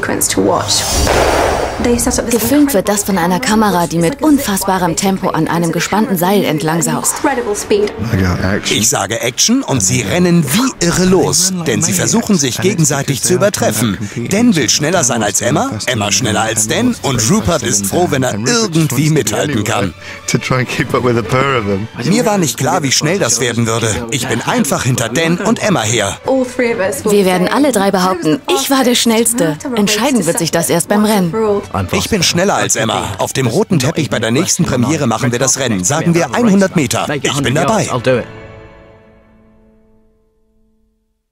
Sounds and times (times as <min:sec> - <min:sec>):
Music: 0:00.0 - 0:41.3
Speech: 0:01.8 - 0:38.3.